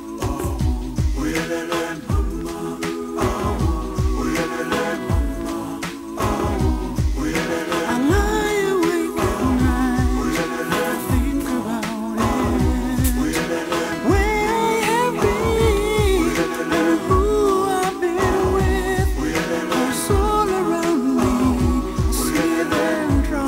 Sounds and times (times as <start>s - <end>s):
Soul music: 0.0s - 23.4s.